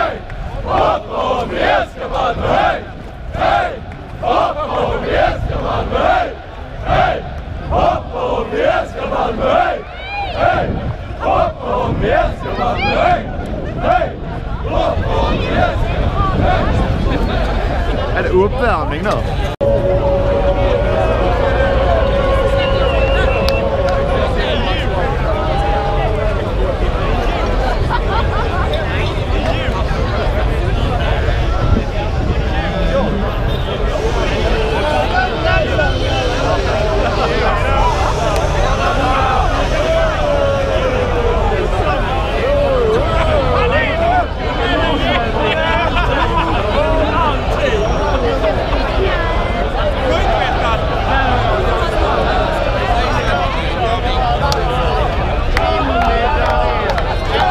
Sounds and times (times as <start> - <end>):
Speech: 11.3 - 19.6, 20.5 - 57.5.